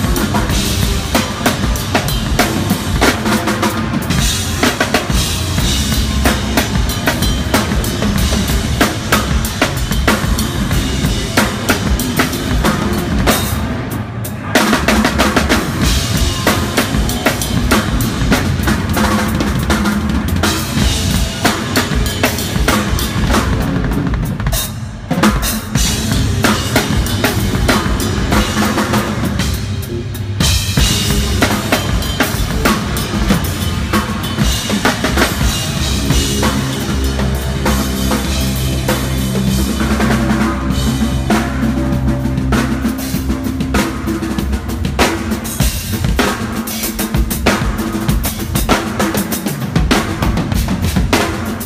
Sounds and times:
Drum kit: 0.0s - 51.6s
Rock music: 0.0s - 51.6s.

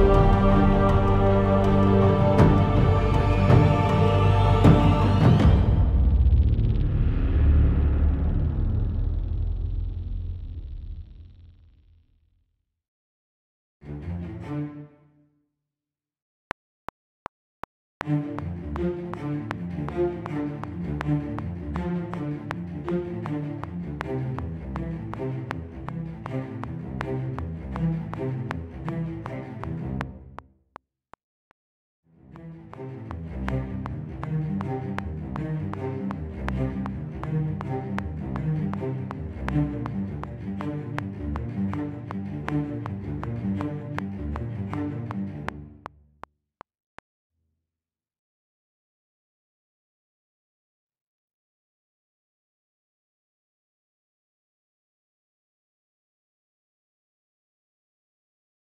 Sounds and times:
Music: 0.0s - 9.4s, 13.8s - 15.6s, 18.0s - 30.4s, 32.1s - 46.2s.

